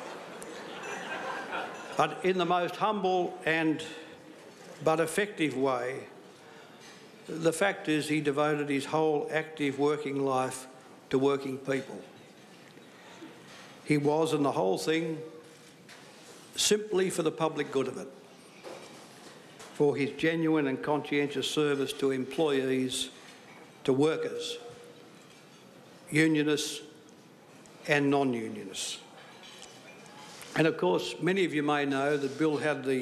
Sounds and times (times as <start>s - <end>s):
Narration, monologue: 0.2s - 33.0s
Male speech, man speaking: 2.0s - 4.1s, 4.8s - 6.1s, 7.3s - 12.0s, 13.9s - 15.3s, 16.6s - 18.1s, 19.8s - 23.1s, 23.8s - 24.8s, 26.1s - 27.0s, 27.9s - 29.0s, 30.6s - 33.0s.